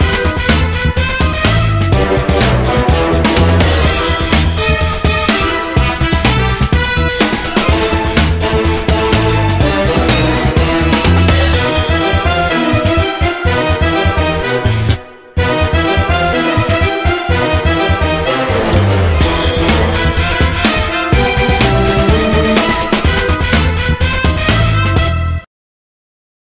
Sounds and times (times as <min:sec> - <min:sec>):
Music: 0:00.0 - 0:25.5.